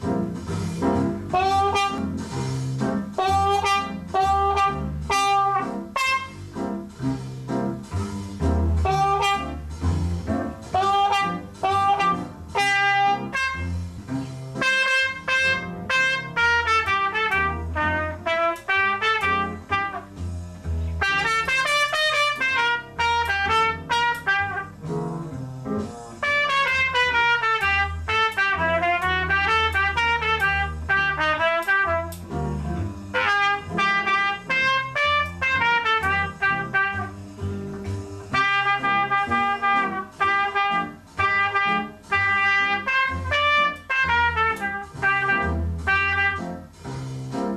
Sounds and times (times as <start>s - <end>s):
Trumpet: 0.8s - 6.7s, 8.7s - 25.0s, 25.8s - 46.8s.